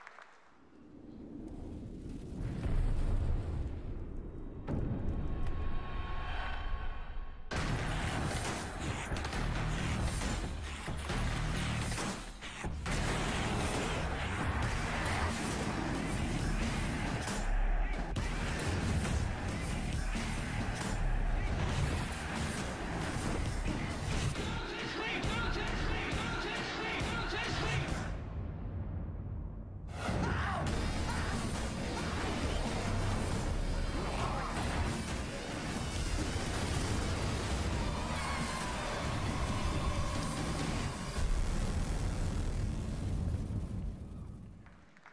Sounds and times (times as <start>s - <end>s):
Music: 4.6s - 44.6s.